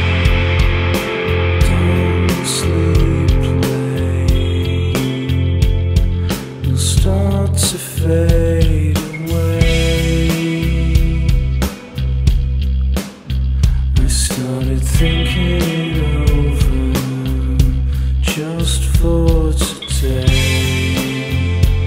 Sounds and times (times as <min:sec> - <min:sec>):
New-age music: 0:00.0 - 0:08.3, 0:09.0 - 0:14.0.